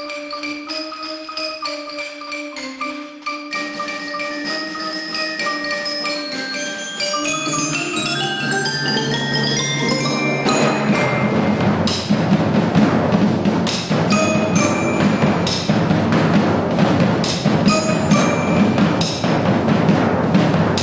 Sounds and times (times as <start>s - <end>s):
Bass drum: 9.8s - 20.8s
Rimshot: 11.0s - 20.8s.